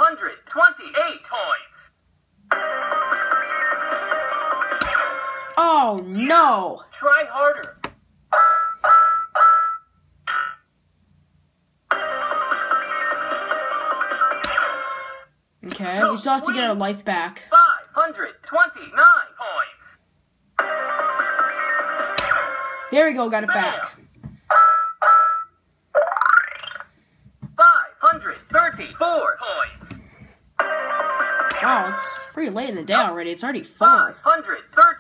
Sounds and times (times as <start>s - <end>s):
Inside, small room: 0.0s - 35.0s
Speech: 15.6s - 19.8s.